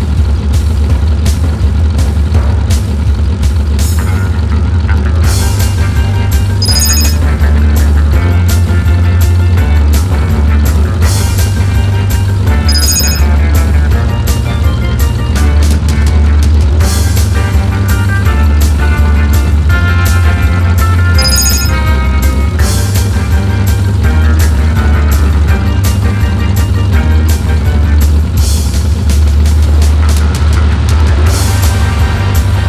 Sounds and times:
Motorboat, speedboat: 0.0s - 32.6s
Music: 0.0s - 32.6s.

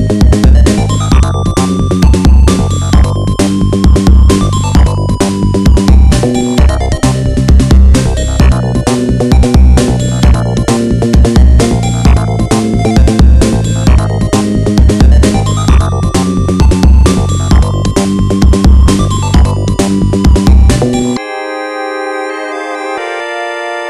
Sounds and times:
Music: 0.0s - 23.9s.

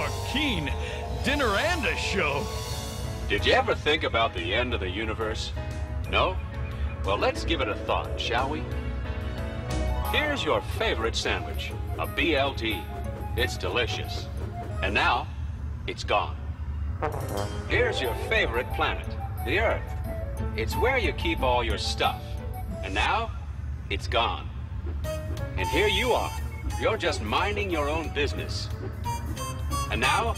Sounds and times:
Speech: 0.0s - 2.5s, 3.3s - 6.4s, 7.1s - 8.7s, 10.1s - 15.3s, 15.9s - 16.4s, 17.7s - 19.8s, 20.6s - 24.5s, 25.6s - 28.7s, 29.9s - 30.3s
Music: 0.0s - 15.8s, 16.9s - 23.7s, 24.9s - 30.3s.

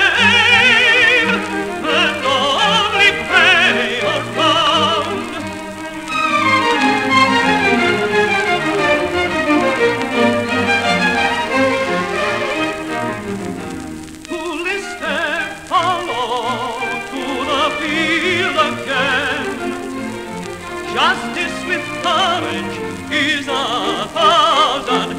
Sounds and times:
Orchestra: 0.0s - 25.1s.

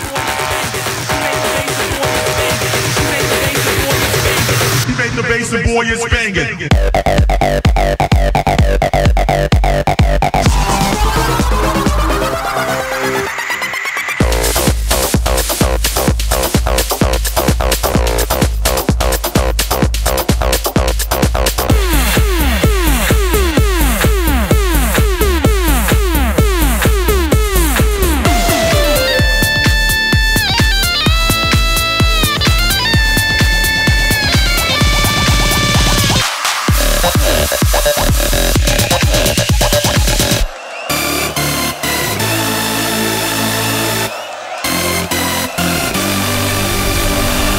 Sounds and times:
Electronic dance music: 0.0s - 30.2s
House music: 14.2s - 30.2s
Exciting music: 28.0s - 30.8s
Trance music: 28.1s - 30.2s
Soundtrack music: 28.1s - 30.9s
Electronica: 28.2s - 30.2s.

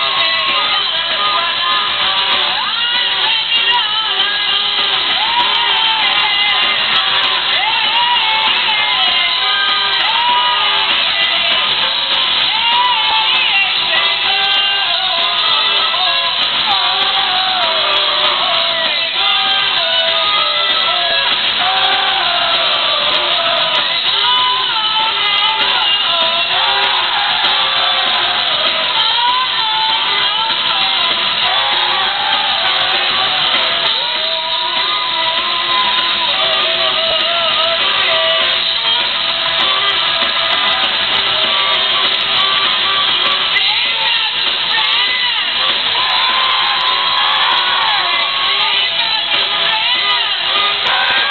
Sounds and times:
Music: 0.0s - 51.3s.

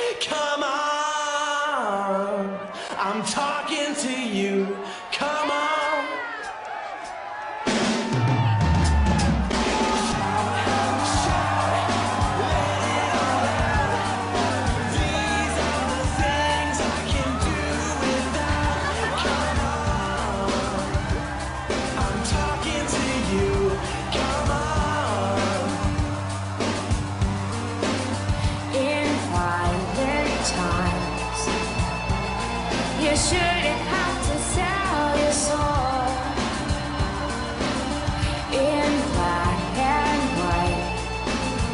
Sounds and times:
Music: 0.0s - 41.7s.

